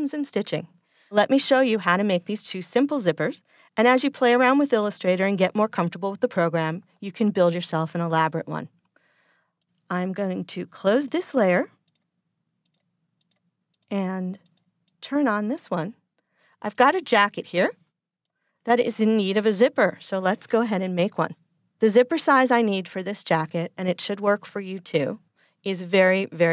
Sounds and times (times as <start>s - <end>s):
Speech: 0.0s - 8.7s, 9.9s - 11.7s, 13.9s - 14.4s, 15.0s - 16.0s, 16.6s - 17.8s, 18.7s - 26.5s.